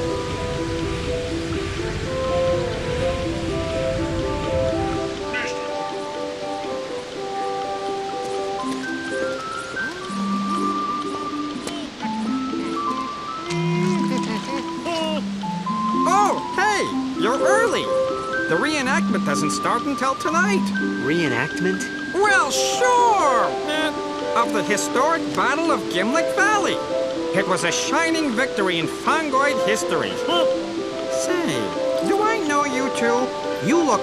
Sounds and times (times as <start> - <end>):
Music: 0.0 - 34.0
Speech: 16.0 - 17.9, 18.5 - 26.8, 27.4 - 30.5, 31.2 - 34.0.